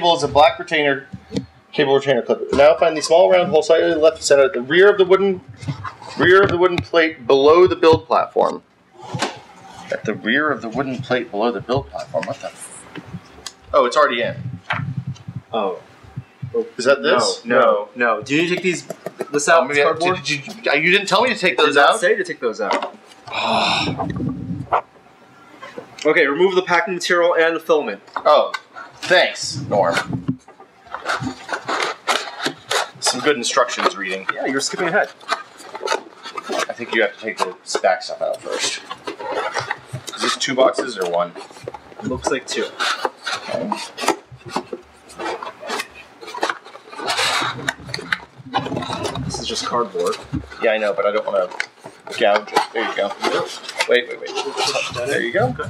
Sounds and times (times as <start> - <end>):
Speech: 0.0 - 1.1, 1.8 - 5.5, 6.2 - 8.6, 9.9 - 12.8, 13.7 - 14.5, 16.4 - 23.0, 26.0 - 30.2, 33.0 - 35.2, 36.6 - 38.8, 40.1 - 41.4, 42.0 - 42.8, 43.4 - 43.8, 47.8 - 55.6.